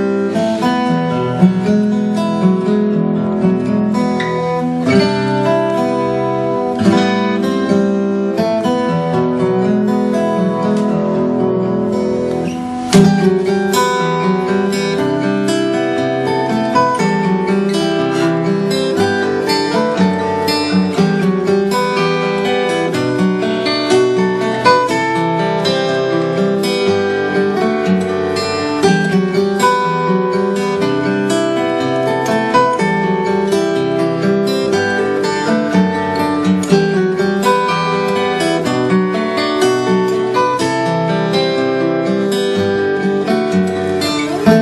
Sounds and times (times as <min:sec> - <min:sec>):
Music: 0:00.0 - 0:44.6.